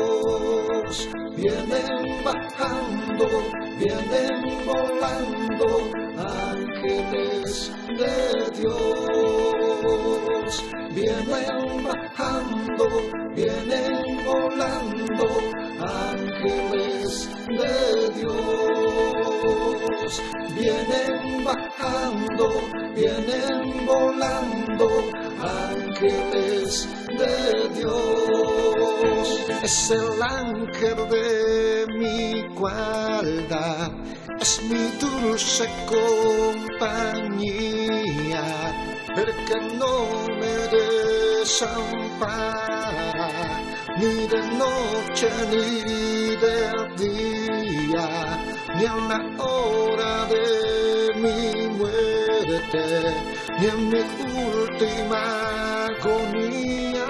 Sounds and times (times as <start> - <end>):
Christmas music: 0.0 - 57.0.